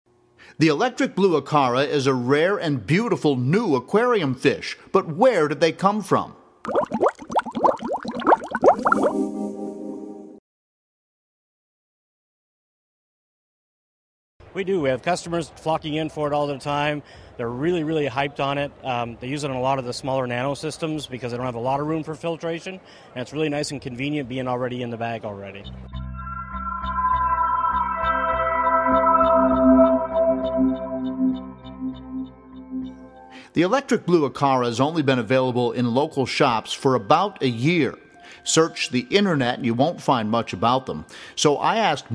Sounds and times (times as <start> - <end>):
Speech: 0.6 - 6.4, 14.5 - 25.6, 33.6 - 42.1
Music: 8.8 - 10.4, 25.7 - 33.5, 36.3 - 40.5.